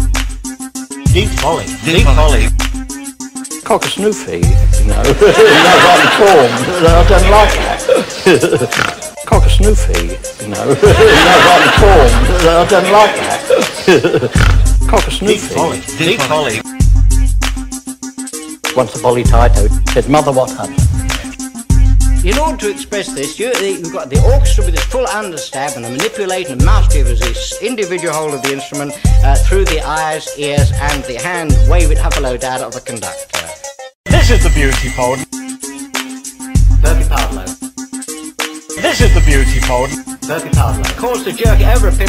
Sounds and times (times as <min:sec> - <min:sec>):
Hip hop music: 0:00.0 - 0:42.0.